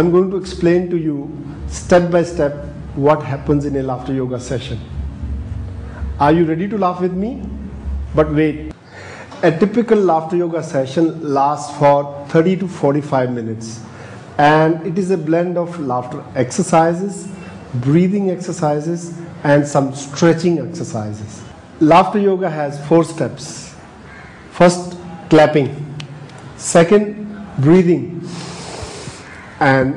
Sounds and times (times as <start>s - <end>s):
Speech: 0.0s - 4.9s, 6.2s - 8.8s, 9.4s - 23.8s, 24.6s - 26.0s, 26.6s - 28.3s, 29.6s - 29.9s.